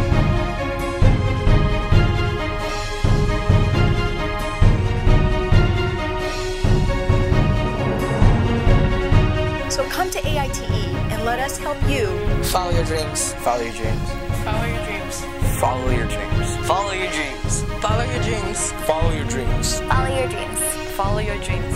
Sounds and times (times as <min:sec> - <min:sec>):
Theme music: 0:00.0 - 0:21.7.